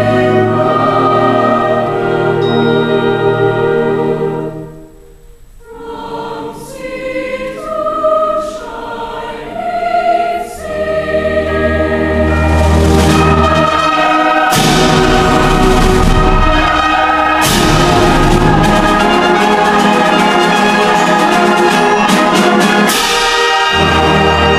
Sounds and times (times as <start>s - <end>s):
Choir: 0.0s - 5.0s, 5.6s - 24.5s.